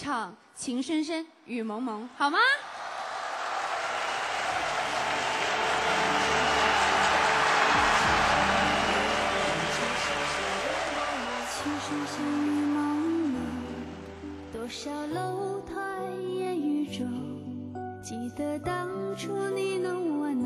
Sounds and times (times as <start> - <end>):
Music: 3.7 - 20.4
Female singing: 11.4 - 20.4.